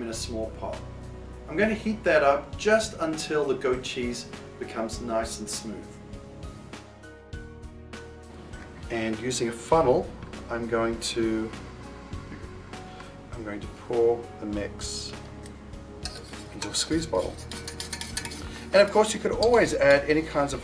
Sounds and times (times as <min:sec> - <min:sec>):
Speech: 0:00.0 - 0:00.8, 0:01.5 - 0:05.9, 0:08.9 - 0:11.5, 0:13.3 - 0:15.2, 0:16.6 - 0:17.4, 0:18.7 - 0:20.6
Music: 0:00.0 - 0:20.6.